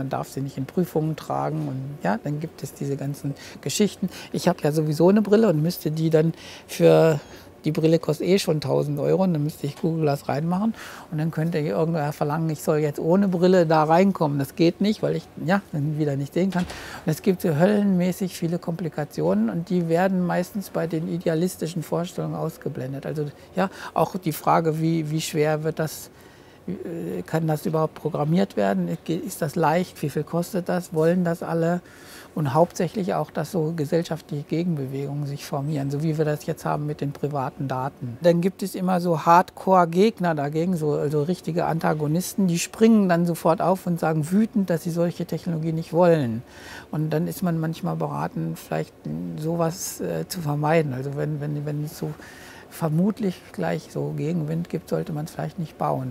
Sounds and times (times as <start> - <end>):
Speech: 0.0 - 26.1, 26.7 - 31.8, 32.4 - 56.1.